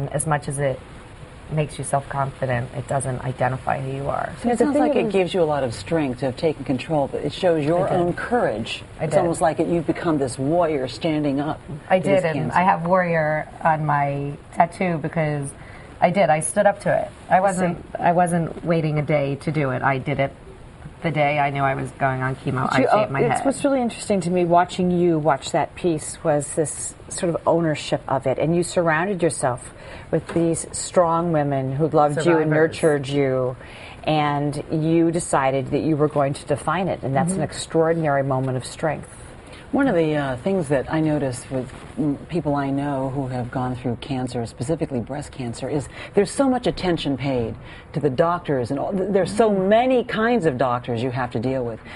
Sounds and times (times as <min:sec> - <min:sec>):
Female speech, woman speaking: 0:00.0 - 0:00.8, 0:01.5 - 0:20.4, 0:21.0 - 0:51.9.